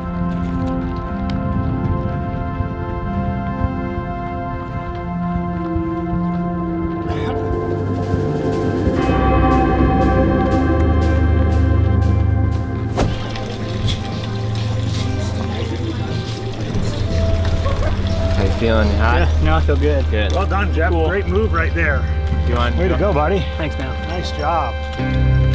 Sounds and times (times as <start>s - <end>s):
Music: 0.0s - 25.5s
Outside, urban or manmade: 0.0s - 25.5s.